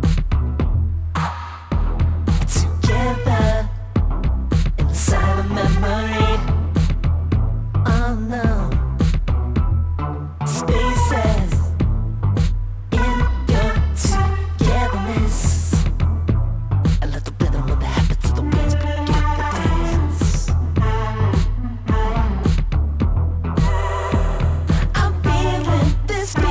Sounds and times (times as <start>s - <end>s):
Music: 0.0s - 26.5s.